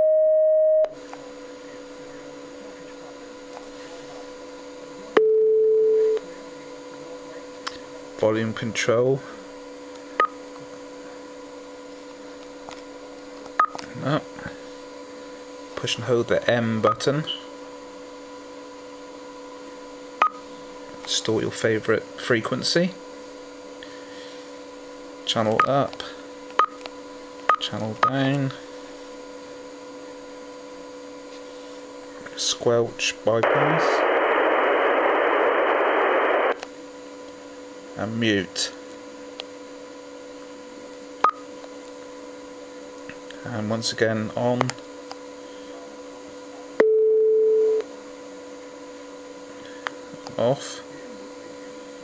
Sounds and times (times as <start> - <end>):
Speech: 8.2 - 9.3, 15.8 - 17.5, 21.1 - 23.0, 25.3 - 26.2, 27.6 - 28.6, 32.3 - 34.0, 38.0 - 38.8, 43.4 - 44.8, 50.3 - 51.6
Radio: 33.3 - 36.6.